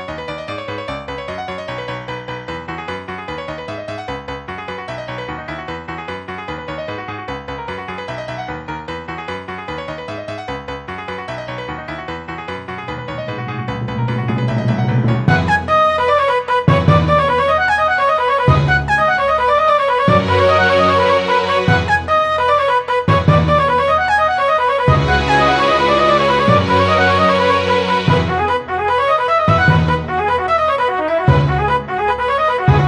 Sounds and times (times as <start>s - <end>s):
Music: 0.0s - 32.8s.